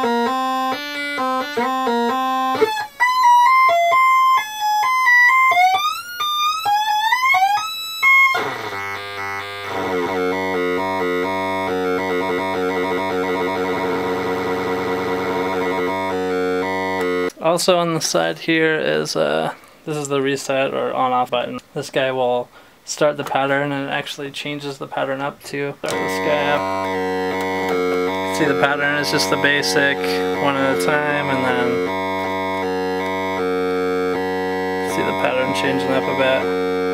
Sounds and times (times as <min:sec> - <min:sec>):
Music: 0:00.0 - 0:17.4, 0:25.9 - 0:36.9
Inside, small room: 0:00.0 - 0:36.9.